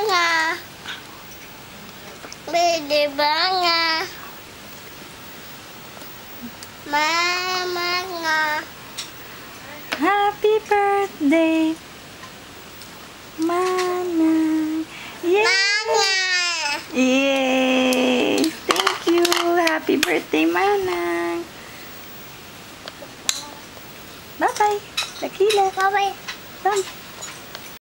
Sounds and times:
Female singing: 9.9 - 11.8, 13.4 - 15.8, 17.0 - 21.5
Speech: 13.4 - 21.5, 24.4 - 26.9.

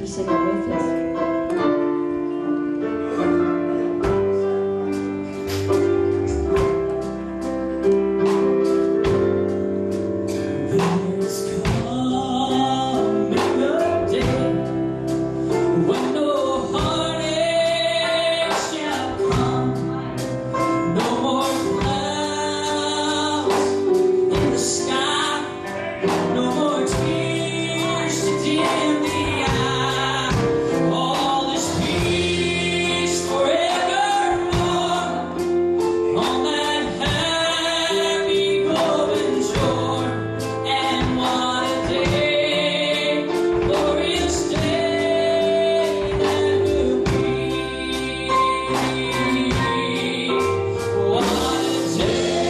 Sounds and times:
Music: 0.0 - 52.4
Male singing: 10.3 - 52.4.

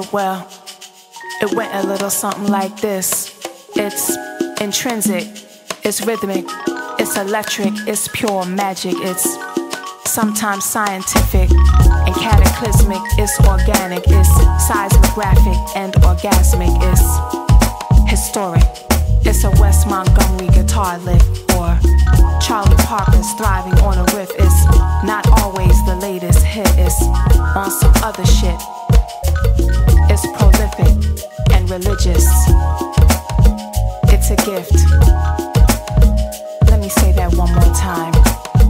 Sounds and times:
Middle Eastern music: 0.0 - 38.6
Soundtrack music: 6.4 - 7.9, 27.0 - 34.2.

